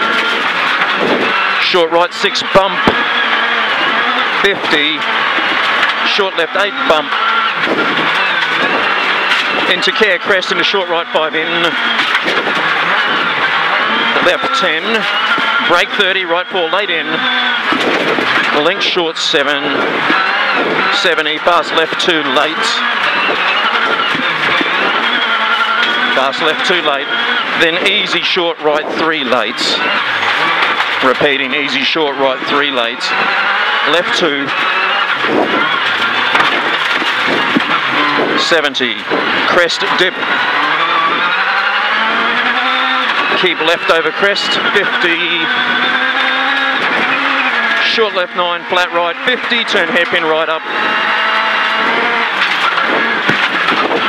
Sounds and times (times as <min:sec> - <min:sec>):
Car: 0:00.0 - 0:54.0
Speech: 0:01.6 - 0:02.9, 0:04.4 - 0:05.1, 0:06.0 - 0:07.1, 0:09.7 - 0:11.8, 0:14.2 - 0:17.2, 0:18.5 - 0:19.8, 0:20.9 - 0:22.9, 0:26.2 - 0:29.9, 0:31.0 - 0:33.2, 0:33.9 - 0:34.5, 0:38.4 - 0:40.2, 0:43.3 - 0:45.5, 0:47.8 - 0:50.6.